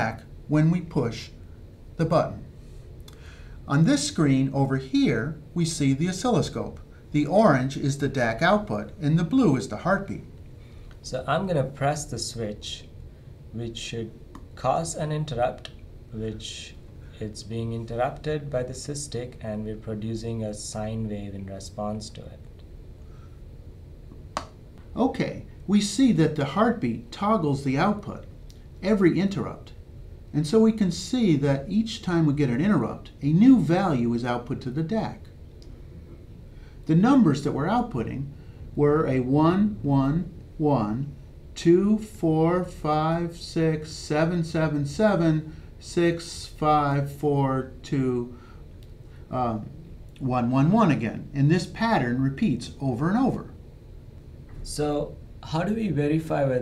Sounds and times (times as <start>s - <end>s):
Speech: 0.0s - 1.4s, 2.0s - 2.5s, 3.7s - 10.3s, 11.0s - 22.5s, 24.9s - 35.3s, 36.9s - 48.4s, 49.3s - 53.6s, 54.6s - 56.6s.